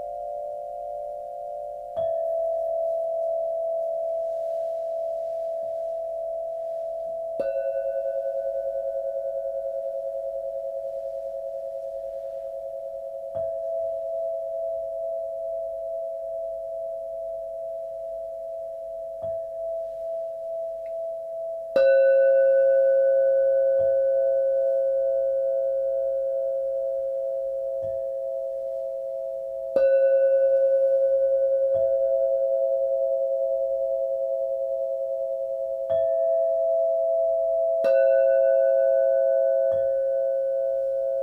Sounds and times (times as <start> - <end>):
Singing bowl: 0.0 - 41.2.